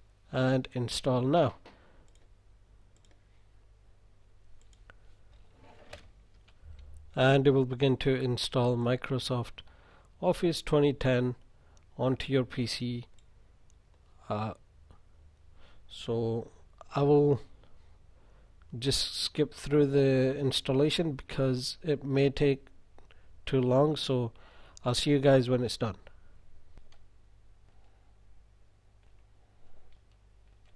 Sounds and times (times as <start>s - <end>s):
Speech: 0.3s - 1.6s, 7.2s - 9.6s, 10.2s - 11.4s, 12.0s - 13.1s, 14.2s - 14.6s, 15.9s - 17.5s, 18.7s - 22.7s, 23.5s - 26.1s.